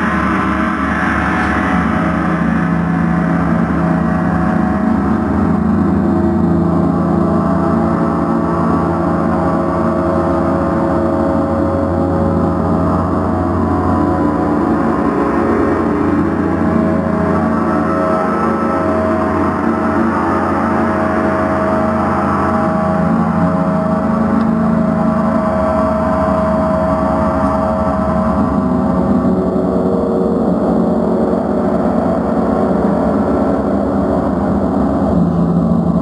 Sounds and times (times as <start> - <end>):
Gong: 0.0 - 36.0.